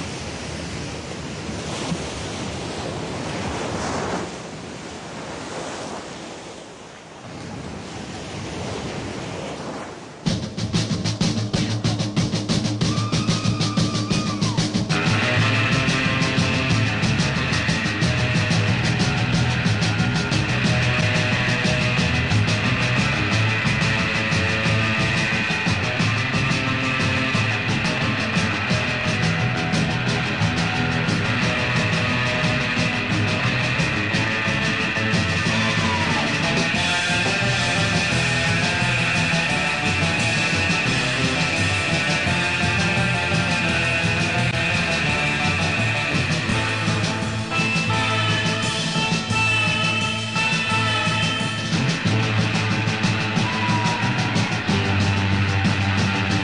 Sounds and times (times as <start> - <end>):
Music: 10.3 - 56.4.